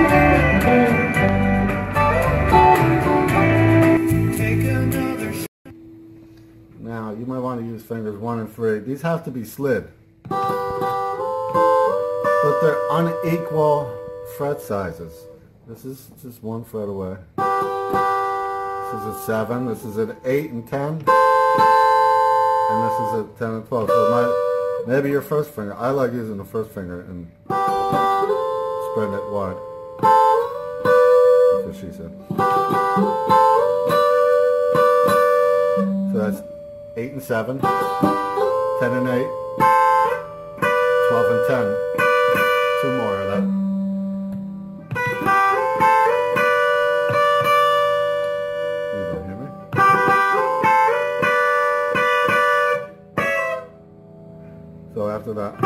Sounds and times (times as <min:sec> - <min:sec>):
Acoustic guitar: 0:00.0 - 0:55.6
Speech: 0:06.8 - 0:09.9, 0:12.4 - 0:17.3, 0:18.8 - 0:21.1, 0:22.7 - 0:27.3, 0:28.8 - 0:29.6, 0:31.5 - 0:32.2, 0:36.1 - 0:37.7, 0:38.8 - 0:39.3, 0:41.0 - 0:41.8, 0:42.8 - 0:43.5, 0:48.9 - 0:49.6, 0:55.0 - 0:55.6.